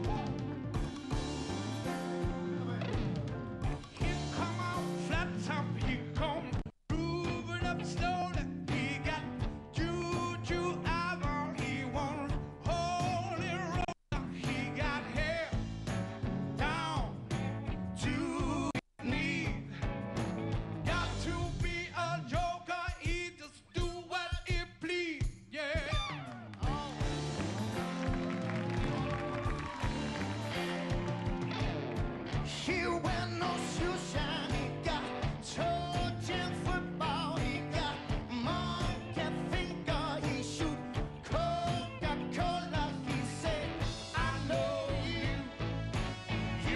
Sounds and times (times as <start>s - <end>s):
Music: 0.0s - 46.7s
Male singing: 4.0s - 15.6s, 16.6s - 17.2s, 18.0s - 19.7s, 20.9s - 27.0s, 32.5s - 45.6s.